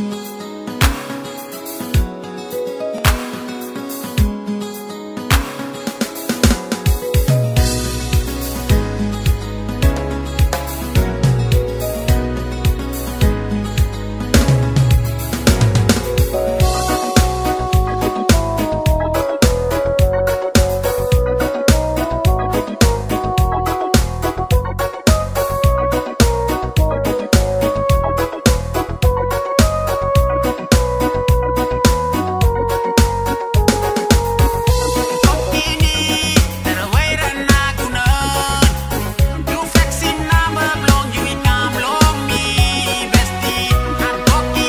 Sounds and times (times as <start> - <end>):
Middle Eastern music: 0.0 - 44.6.